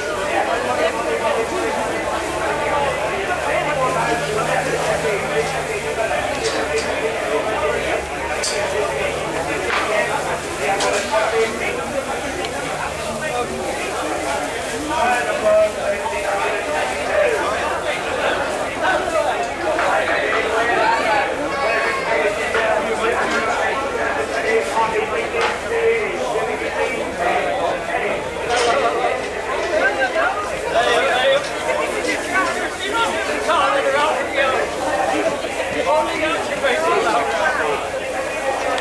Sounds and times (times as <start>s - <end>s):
Speech: 0.0s - 38.8s.